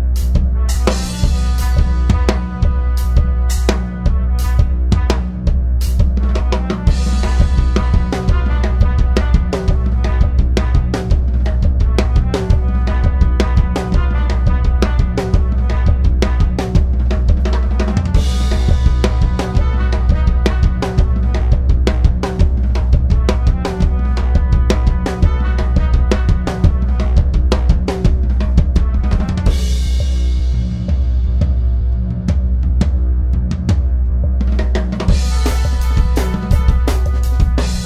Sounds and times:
Bass drum: 0:00.0 - 0:37.8
Drum kit: 0:00.0 - 0:37.8.

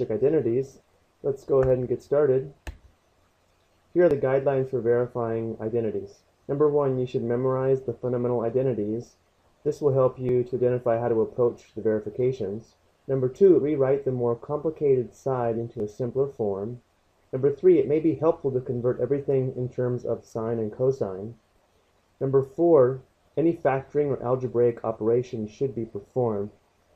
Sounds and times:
Speech: 0:00.0 - 0:02.6, 0:04.0 - 0:16.8, 0:17.4 - 0:21.4, 0:22.2 - 0:26.6.

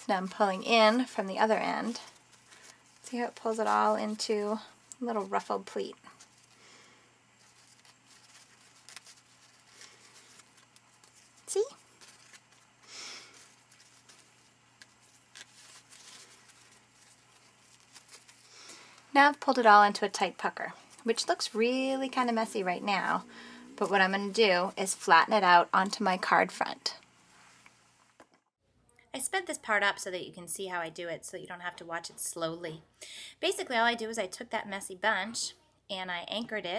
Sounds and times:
Speech: 0:00.0 - 0:02.1, 0:03.1 - 0:06.0, 0:11.5 - 0:11.8, 0:19.1 - 0:27.0, 0:29.0 - 0:36.7.

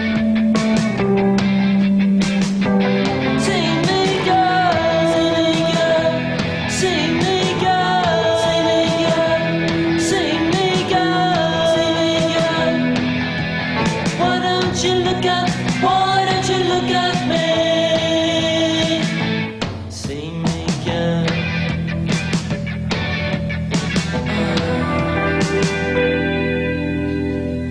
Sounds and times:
Rock music: 0:00.0 - 0:27.7
Ska: 0:00.0 - 0:27.7
Singing: 0:03.4 - 0:12.9, 0:14.2 - 0:19.2.

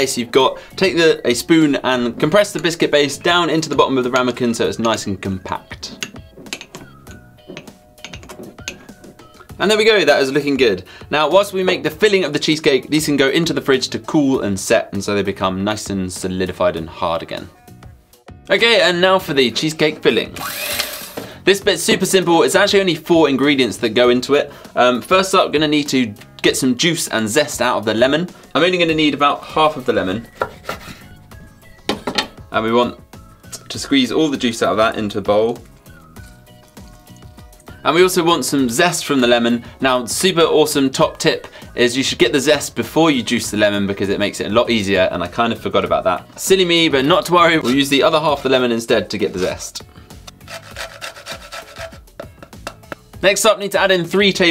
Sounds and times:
Speech: 0:00.0 - 0:06.0, 0:09.6 - 0:17.5, 0:18.5 - 0:20.4, 0:21.4 - 0:30.3, 0:32.5 - 0:33.0, 0:33.6 - 0:35.6, 0:37.8 - 0:49.9, 0:53.2 - 0:54.5.

